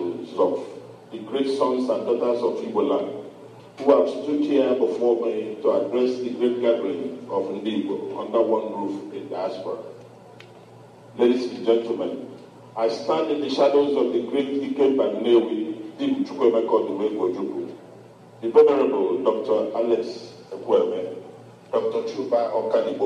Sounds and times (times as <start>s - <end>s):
Male speech, man speaking: 0.0s - 3.2s, 3.8s - 10.0s, 11.2s - 17.8s, 18.4s - 23.0s.